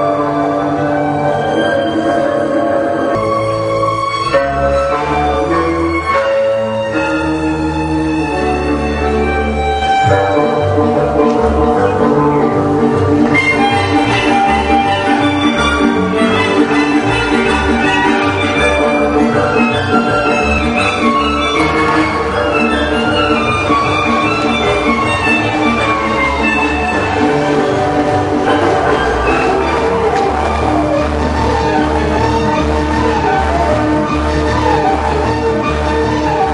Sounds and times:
Dance music: 0.0s - 36.5s
Folk music: 0.0s - 36.5s.

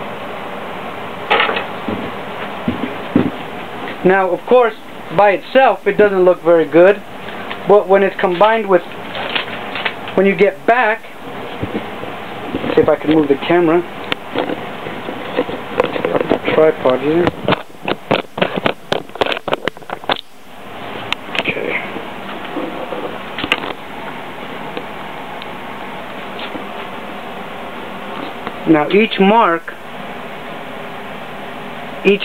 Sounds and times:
Speech: 4.0s - 7.0s, 7.7s - 8.9s, 10.2s - 11.2s, 12.7s - 13.9s, 16.4s - 17.4s, 21.4s - 21.9s, 28.6s - 29.8s, 32.0s - 32.2s.

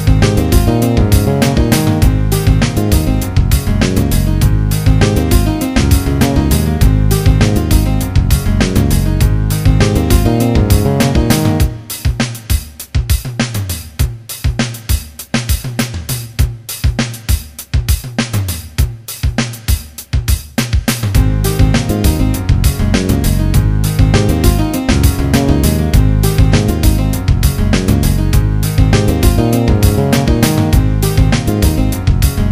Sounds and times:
Video game music: 0.0s - 12.2s, 21.2s - 32.5s.

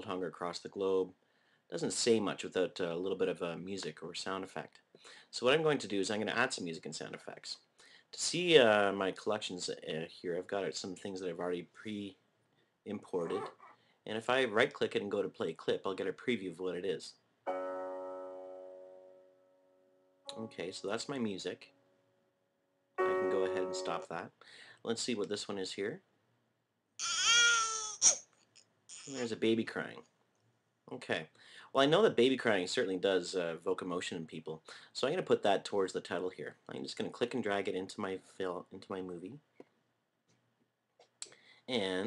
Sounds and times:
Speech: 0.0s - 12.2s, 12.8s - 17.2s, 20.3s - 21.8s, 23.2s - 26.1s, 29.1s - 30.1s, 30.9s - 39.5s, 41.2s - 42.0s.

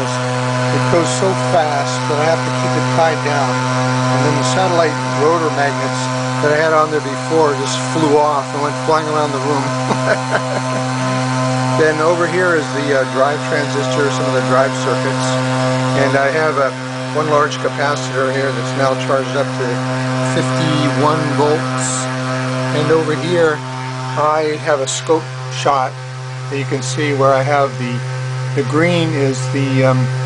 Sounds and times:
Speech: 0.0s - 10.8s, 11.8s - 28.0s, 28.6s - 30.2s.

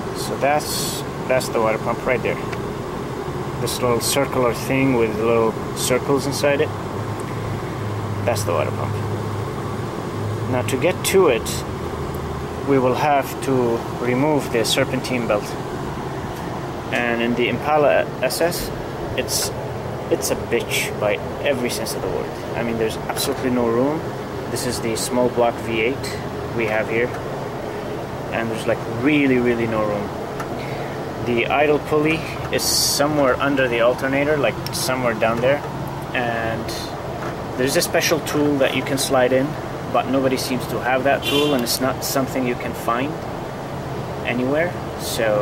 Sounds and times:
Speech: 0.2s - 2.5s, 3.6s - 6.7s, 8.2s - 9.1s, 10.5s - 11.7s, 12.7s - 15.6s, 16.9s - 27.2s, 28.3s - 30.1s, 31.2s - 37.0s, 37.6s - 43.2s, 44.2s - 45.4s.

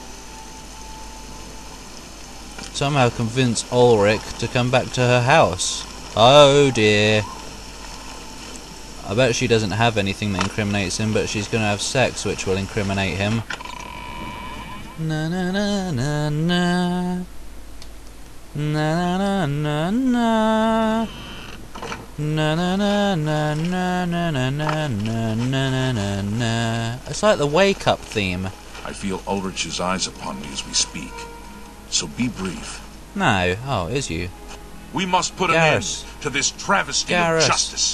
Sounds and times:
Speech: 2.7s - 7.3s, 9.0s - 13.4s, 27.1s - 31.3s, 31.9s - 34.3s, 35.0s - 37.9s.

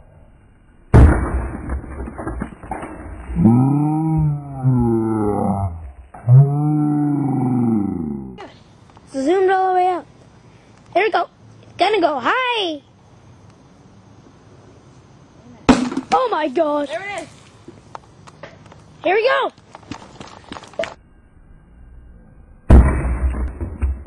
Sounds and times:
Outside, urban or manmade: 0.0s - 24.0s.

